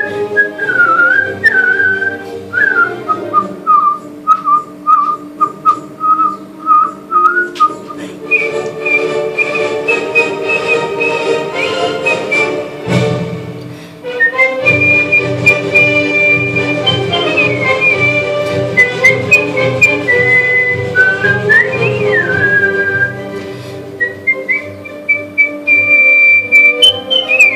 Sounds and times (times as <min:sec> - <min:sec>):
Whistling: 0:00.0 - 0:12.6, 0:14.1 - 0:23.2, 0:24.0 - 0:27.5.